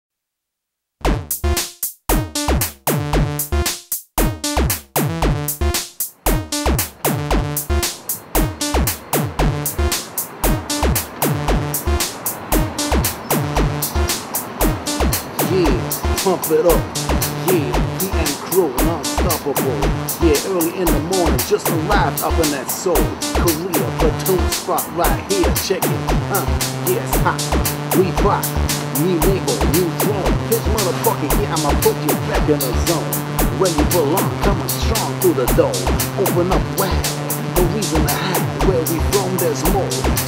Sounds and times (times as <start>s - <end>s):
Drum machine: 1.0s - 40.2s.